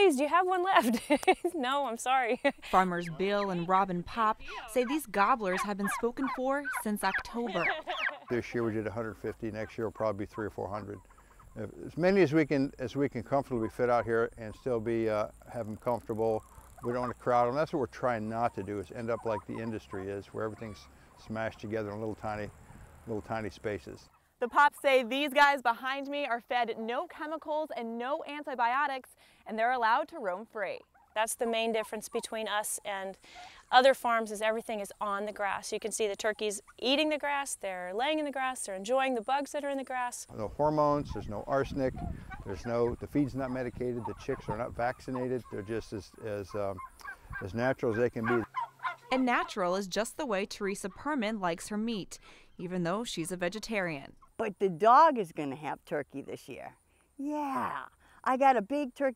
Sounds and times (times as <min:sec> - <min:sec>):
Gobble: 0:03.0 - 0:11.8, 0:13.6 - 0:14.7, 0:16.0 - 0:17.6, 0:18.2 - 0:21.0, 0:41.0 - 0:49.9.